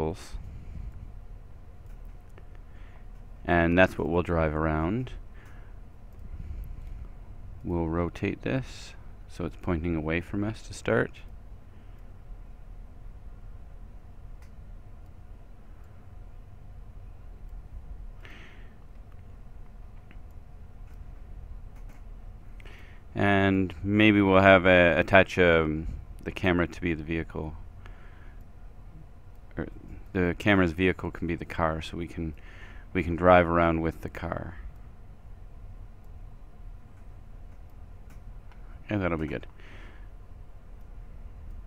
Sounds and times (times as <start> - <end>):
Speech: 0.0 - 0.4, 3.4 - 5.2, 7.6 - 11.3, 23.2 - 27.6, 29.5 - 34.6, 38.8 - 39.5.